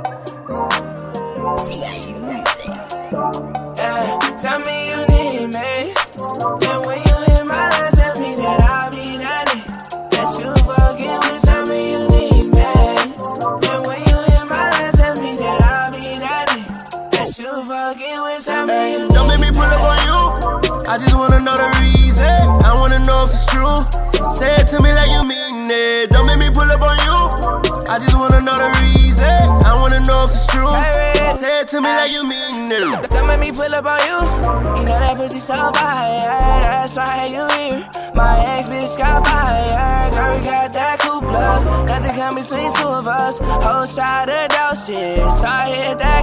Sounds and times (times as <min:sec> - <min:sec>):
Music: 0:00.0 - 0:46.2.